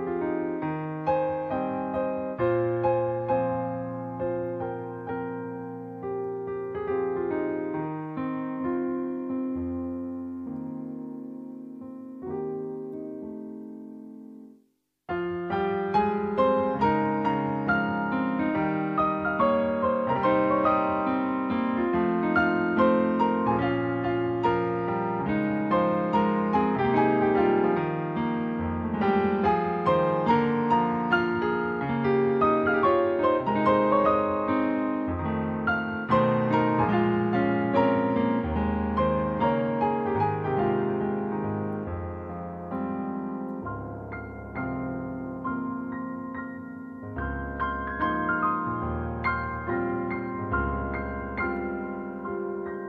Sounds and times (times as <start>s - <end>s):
Electric piano: 0.0s - 52.8s.